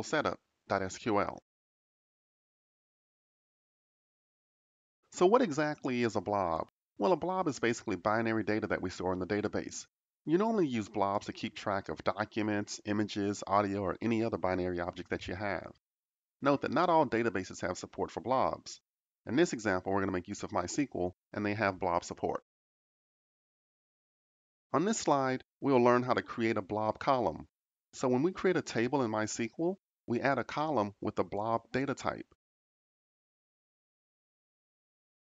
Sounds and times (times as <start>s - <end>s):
Speech: 0.0s - 1.5s, 5.2s - 15.8s, 16.4s - 22.5s, 24.8s - 32.4s.